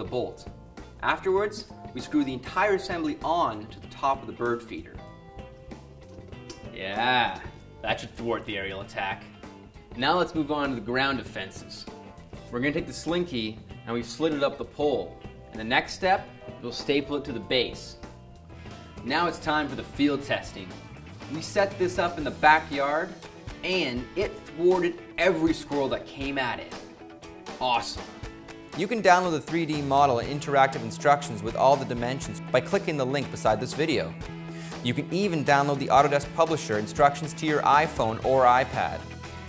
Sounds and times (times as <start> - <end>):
Speech: 0.0 - 5.0, 6.8 - 9.3, 10.0 - 11.9, 12.5 - 18.0, 19.0 - 26.8, 27.6 - 28.1, 28.8 - 34.2, 34.8 - 39.0.